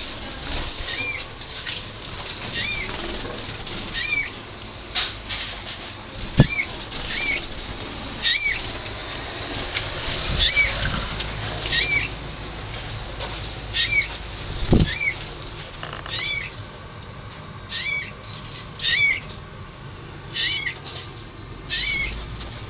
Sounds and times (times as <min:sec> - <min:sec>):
Bird flight, flapping wings: 0:00.0 - 0:04.3, 0:06.2 - 0:11.0, 0:14.4 - 0:15.8.